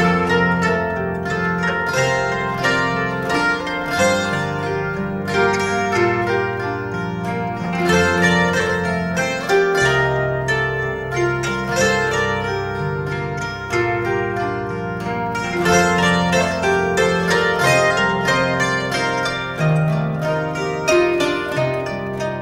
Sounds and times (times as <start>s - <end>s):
Harp: 0.0s - 22.4s
Plucked string instrument: 0.0s - 22.4s.